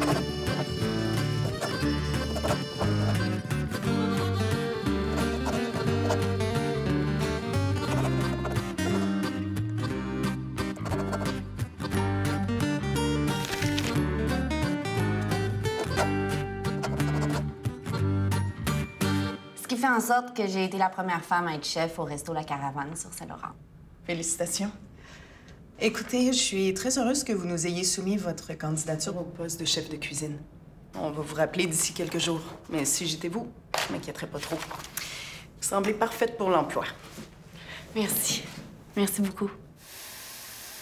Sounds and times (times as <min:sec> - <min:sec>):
Speech: 0:19.6 - 0:24.8, 0:25.8 - 0:30.4, 0:31.0 - 0:34.7, 0:35.6 - 0:37.0, 0:38.0 - 0:39.6.